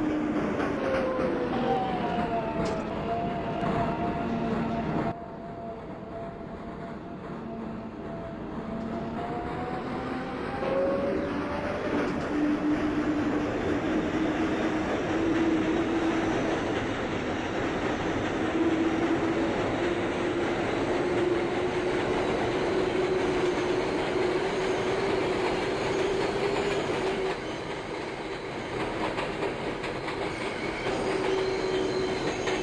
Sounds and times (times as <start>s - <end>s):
Clickety-clack: 0.0s - 2.9s, 6.1s - 32.6s
Railroad car, train wagon: 0.0s - 32.6s
Subway, metro, underground: 0.0s - 32.6s
Train: 0.0s - 32.6s.